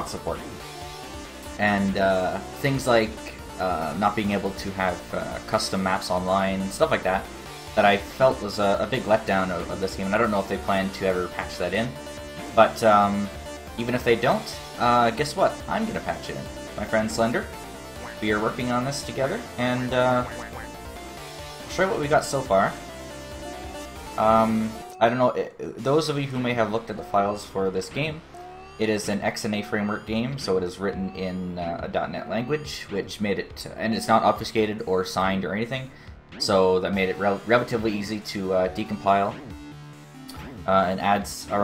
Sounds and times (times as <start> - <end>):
Speech: 0.0 - 0.6, 1.6 - 17.5, 18.1 - 20.7, 21.7 - 22.8, 24.2 - 28.2, 28.8 - 39.4, 40.3 - 41.6
Music: 0.0 - 41.6.